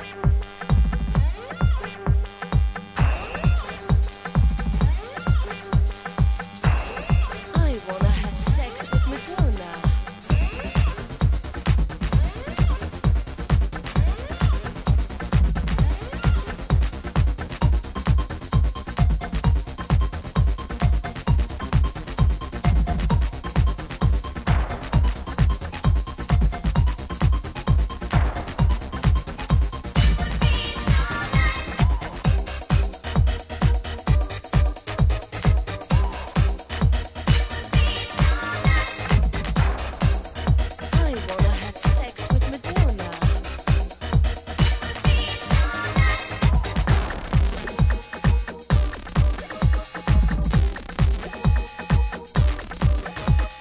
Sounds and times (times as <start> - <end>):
Techno: 0.0 - 53.6.